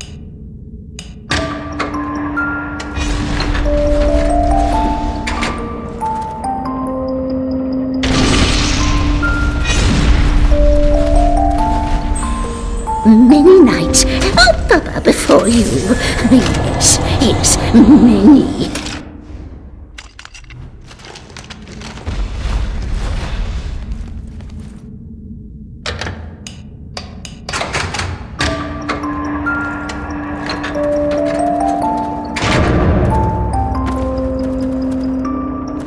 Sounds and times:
Speech: 0:13.1 - 0:18.8.

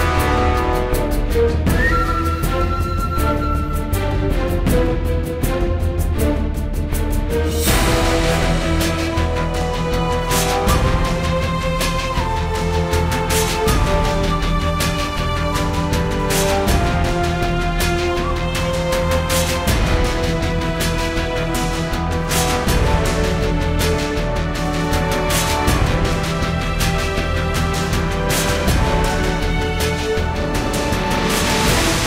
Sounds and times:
Music: 0:00.0 - 0:32.0.

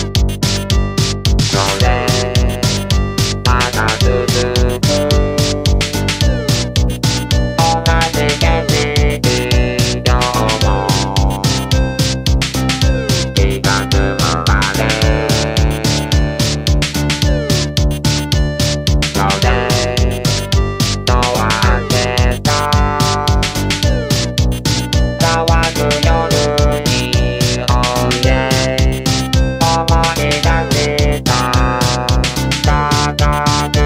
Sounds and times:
Music: 0:00.0 - 0:33.8.

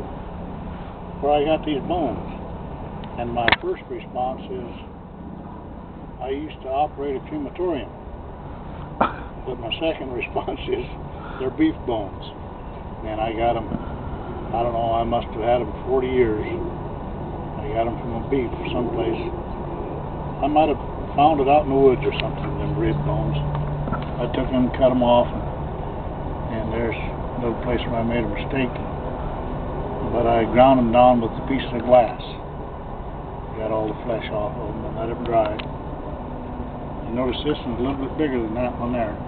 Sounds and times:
Outside, urban or manmade: 0:00.0 - 0:39.2
Speech: 0:01.2 - 0:02.4, 0:03.1 - 0:04.9, 0:06.2 - 0:07.9, 0:09.4 - 0:12.4, 0:13.0 - 0:13.7, 0:14.5 - 0:16.7, 0:17.6 - 0:19.3, 0:20.4 - 0:23.5, 0:24.2 - 0:25.4, 0:26.5 - 0:28.8, 0:30.1 - 0:32.4, 0:33.5 - 0:35.6, 0:37.0 - 0:39.2.

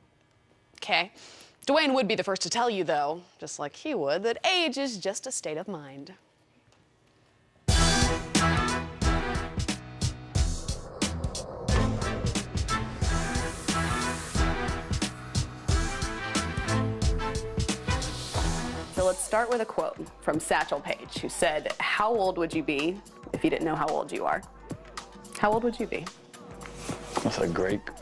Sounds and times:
Speech: 0:00.8 - 0:06.2
Music: 0:07.7 - 0:28.0.

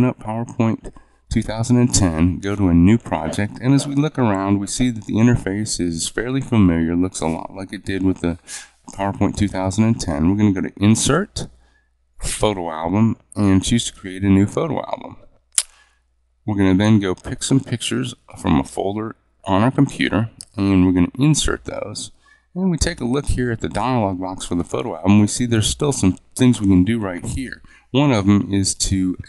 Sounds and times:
Speech: 0:00.0 - 0:11.6, 0:12.2 - 0:15.3, 0:16.4 - 0:29.2.

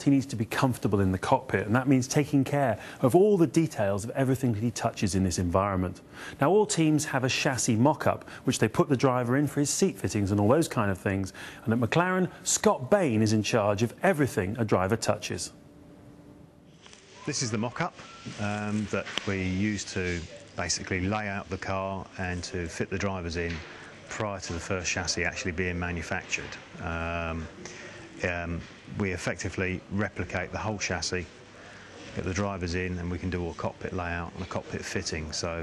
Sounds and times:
Speech: 0:00.0 - 0:15.6, 0:17.2 - 0:27.6, 0:28.2 - 0:31.3, 0:32.1 - 0:35.6.

